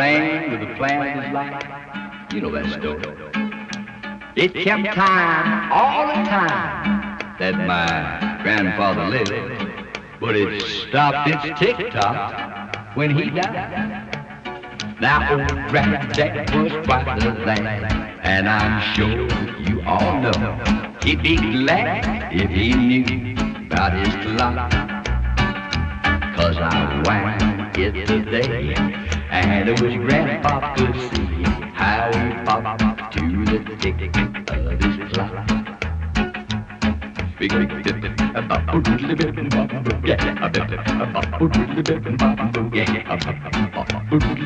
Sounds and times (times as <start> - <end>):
Music: 0.0 - 44.4.